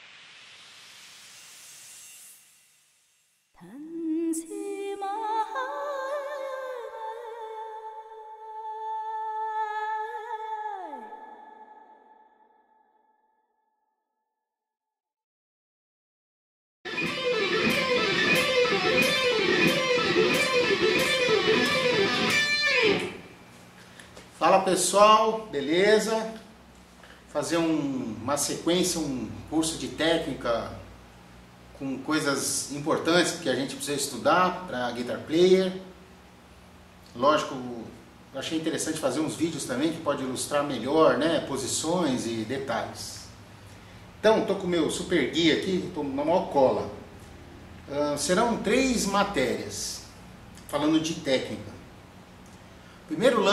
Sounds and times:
Speech: 0:24.4 - 0:26.5, 0:27.4 - 0:30.9, 0:31.8 - 0:35.9, 0:37.1 - 0:43.3, 0:44.2 - 0:47.1, 0:47.9 - 0:50.1, 0:50.7 - 0:51.9, 0:53.1 - 0:53.5.

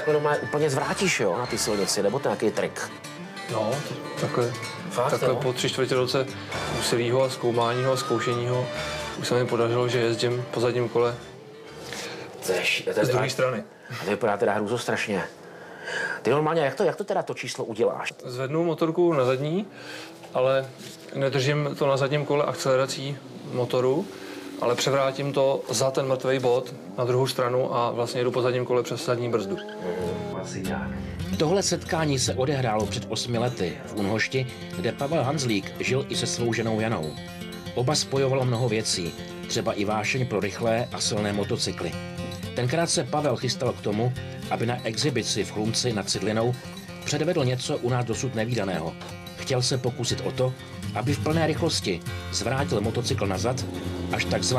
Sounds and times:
Speech: 0:00.0 - 0:02.9, 0:03.5 - 0:11.2, 0:12.4 - 0:15.3, 0:16.2 - 0:19.7, 0:20.4 - 0:37.2, 0:37.8 - 0:42.0, 0:42.6 - 0:54.5
Vehicle: 0:21.8 - 0:27.0, 0:52.3 - 0:54.5.

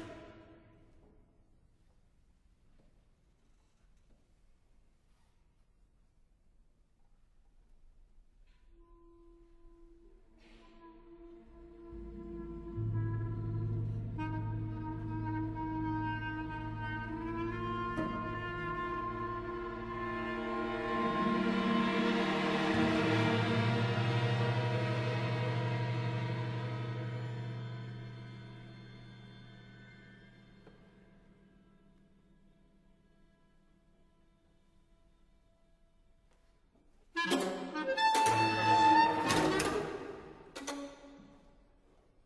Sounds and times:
Orchestra: 0:00.0 - 0:01.3, 0:08.4 - 0:42.2
Clarinet: 0:08.5 - 0:28.7, 0:37.1 - 0:41.1
Percussion: 0:10.3 - 0:31.9, 0:37.2 - 0:41.4.

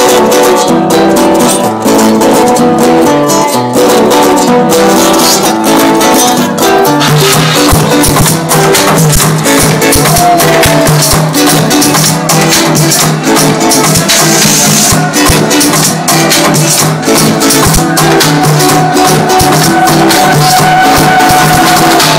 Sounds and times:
House music: 0:00.0 - 0:22.1.

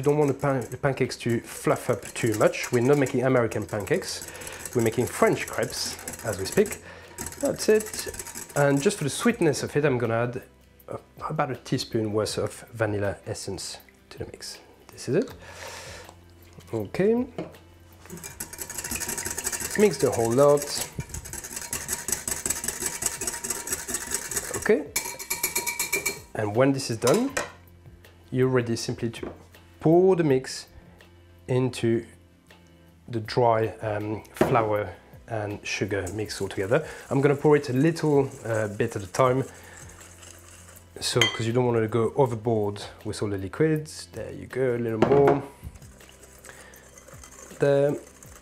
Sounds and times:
Speech: 0:00.0 - 0:06.8, 0:07.4 - 0:15.4, 0:16.7 - 0:17.4, 0:19.7 - 0:20.9, 0:24.5 - 0:25.0, 0:26.4 - 0:27.5, 0:28.3 - 0:30.7, 0:31.5 - 0:32.2, 0:33.1 - 0:39.5, 0:41.0 - 0:45.5, 0:47.6 - 0:48.0.

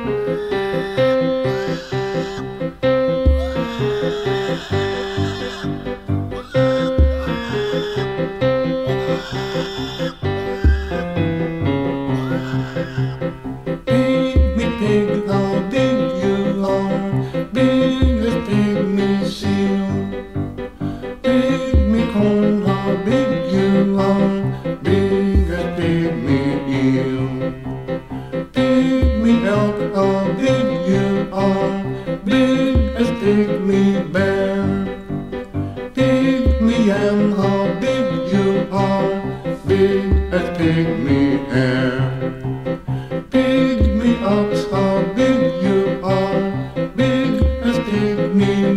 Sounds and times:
Music: 0:00.0 - 0:48.7.

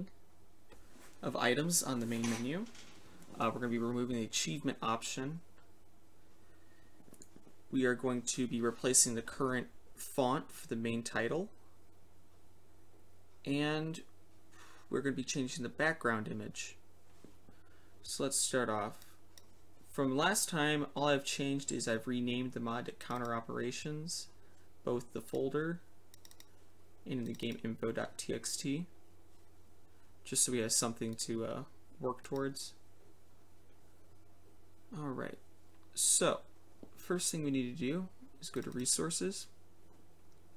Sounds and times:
Speech: 0:01.2 - 0:02.8, 0:03.4 - 0:05.5, 0:07.7 - 0:11.6, 0:13.4 - 0:14.1, 0:14.9 - 0:16.8, 0:18.0 - 0:19.1, 0:19.9 - 0:25.9, 0:27.1 - 0:28.9, 0:30.2 - 0:32.8, 0:34.9 - 0:39.6.

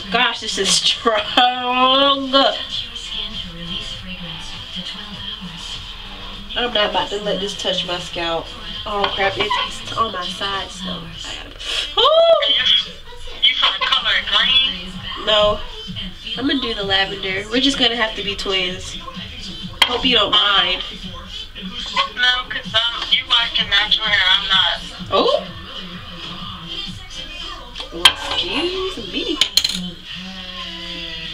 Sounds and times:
Inside, small room: 0:00.0 - 0:31.3
Music: 0:00.0 - 0:31.3
Speech: 0:06.6 - 0:11.5, 0:12.1 - 0:21.0.

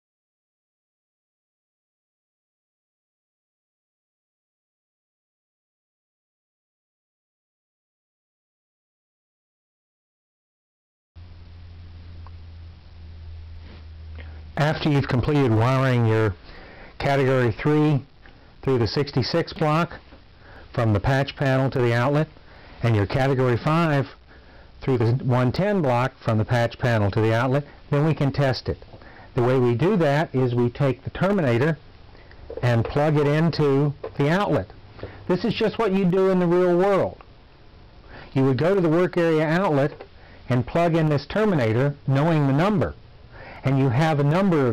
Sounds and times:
Speech: 0:14.6 - 0:16.4, 0:17.0 - 0:20.0, 0:20.7 - 0:24.2, 0:24.8 - 0:28.8, 0:29.4 - 0:31.8, 0:32.6 - 0:37.2, 0:38.4 - 0:43.0, 0:43.6 - 0:44.7.

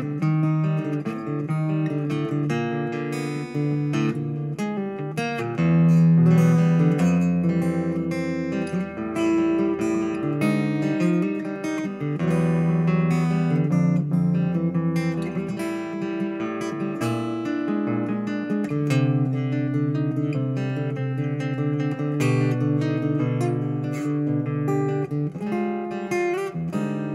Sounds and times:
Acoustic guitar: 0:00.0 - 0:27.1
Strum: 0:00.0 - 0:27.1.

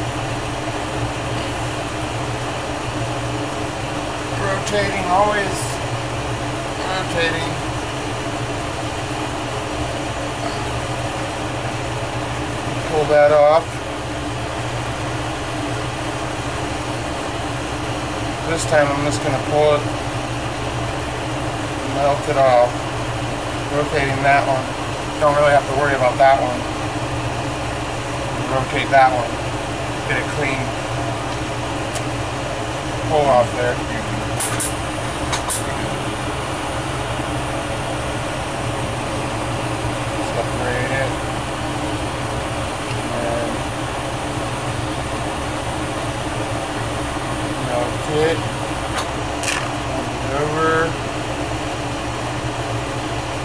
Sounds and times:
Speech: 0:04.4 - 0:05.8, 0:06.8 - 0:07.6, 0:12.8 - 0:13.7, 0:18.4 - 0:19.9, 0:21.9 - 0:22.8, 0:23.7 - 0:26.6, 0:28.4 - 0:29.4, 0:30.0 - 0:30.8, 0:33.0 - 0:34.2, 0:40.2 - 0:41.2, 0:43.0 - 0:43.6, 0:47.6 - 0:48.4, 0:49.9 - 0:51.0.

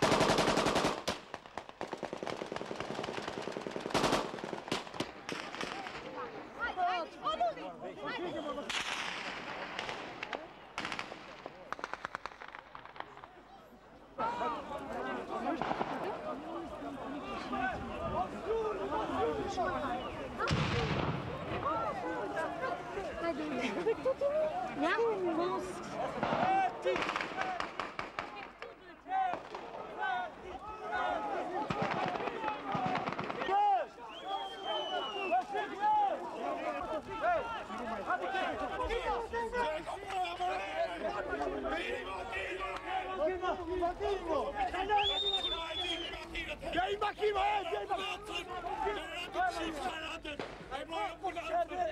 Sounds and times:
Outside, urban or manmade: 0:00.0 - 0:51.9
Speech: 0:13.0 - 0:51.9.

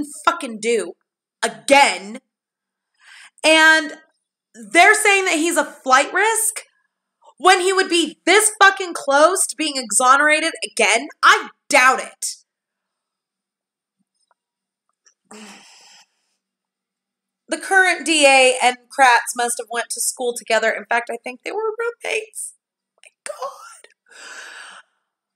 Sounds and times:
Speech: 0:00.0 - 0:02.2, 0:03.4 - 0:04.0, 0:04.6 - 0:06.6, 0:07.3 - 0:12.4, 0:17.5 - 0:22.5
Inside, small room: 0:00.0 - 0:25.3.

